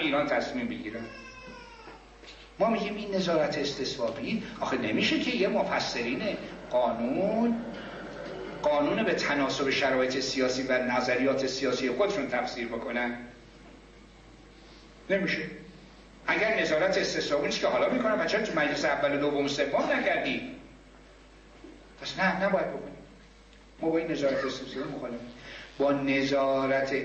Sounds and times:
Male speech, man speaking: 0.0s - 1.2s, 2.6s - 7.7s, 8.6s - 13.4s, 15.1s - 15.7s, 16.3s - 20.7s, 22.0s - 23.1s, 23.8s - 27.0s.

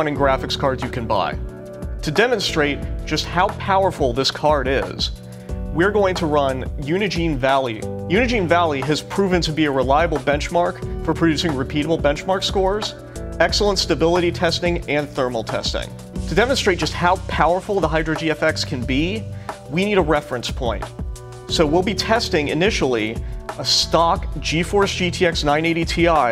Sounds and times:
Speech: 0.0s - 5.2s, 5.8s - 20.9s, 21.5s - 26.3s
Music: 0.0s - 26.3s.

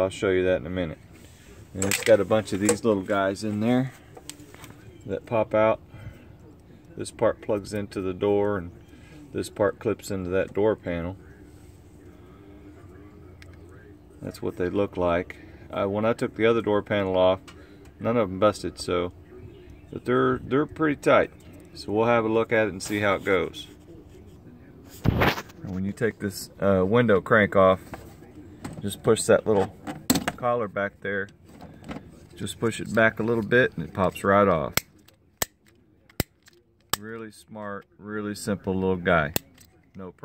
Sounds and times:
Speech: 0.0s - 40.2s.

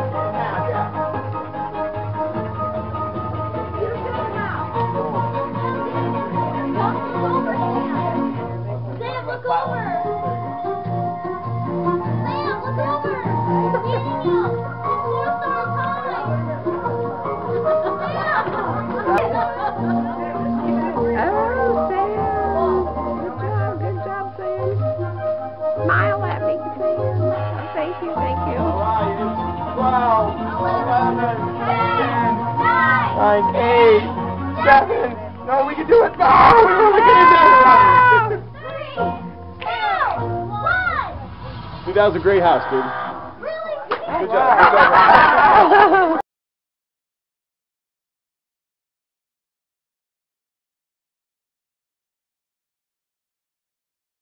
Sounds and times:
Chatter: 0.0s - 45.2s.

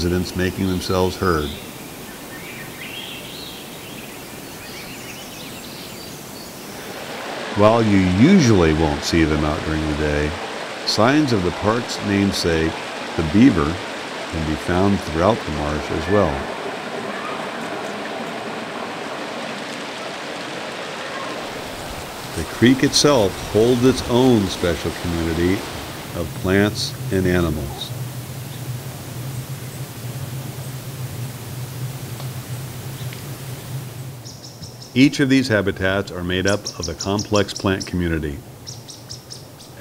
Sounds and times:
Speech: 0.0s - 1.6s, 7.6s - 13.8s, 14.4s - 16.5s, 22.4s - 27.9s, 35.0s - 38.4s.

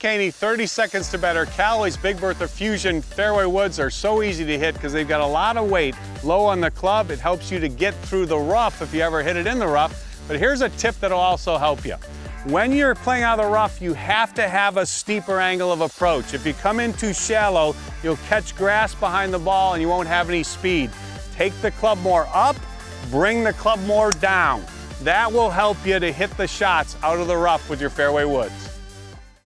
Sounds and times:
Speech: 0.0s - 28.7s
Music: 0.0s - 29.5s.

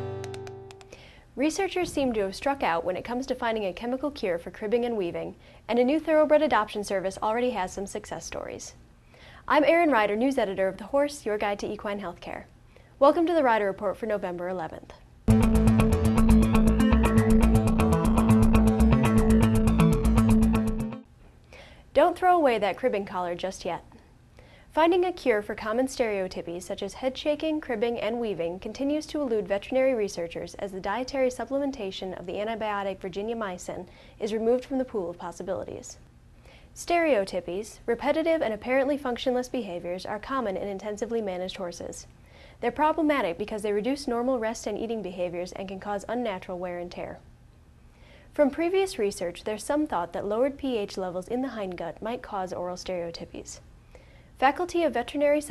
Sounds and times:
Female speech, woman speaking: 1.4s - 8.8s, 9.5s - 15.0s, 22.0s - 23.9s, 24.8s - 36.0s, 36.8s - 47.3s, 48.4s - 53.6s, 54.4s - 55.5s.

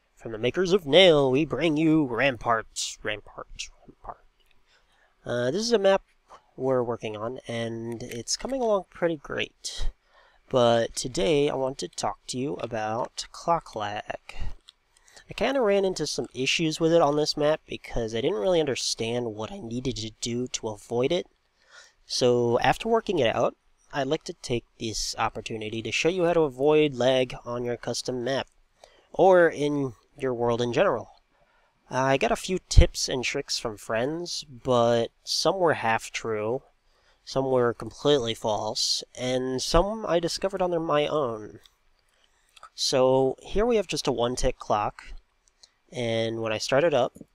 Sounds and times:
Speech: 0.2s - 4.2s, 5.2s - 6.0s, 6.6s - 14.6s, 15.2s - 21.3s, 22.1s - 28.5s, 29.2s - 31.2s, 31.9s - 36.6s, 37.3s - 41.6s, 42.6s - 45.2s, 45.9s - 47.3s.

